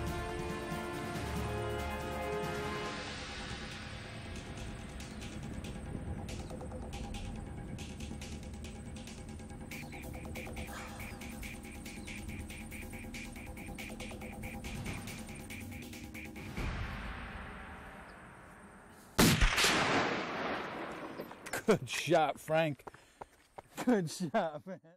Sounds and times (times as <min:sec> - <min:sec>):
Gunshot, gunfire: 0:19.2 - 0:21.4.